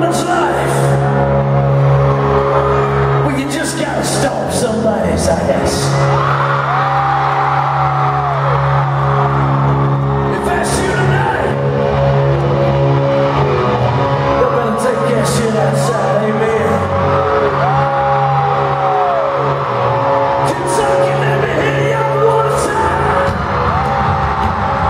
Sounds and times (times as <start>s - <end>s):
Speech: 0.0s - 1.0s, 3.2s - 6.0s, 10.3s - 11.6s, 14.4s - 16.9s, 20.5s - 23.3s
Music: 0.0s - 24.8s.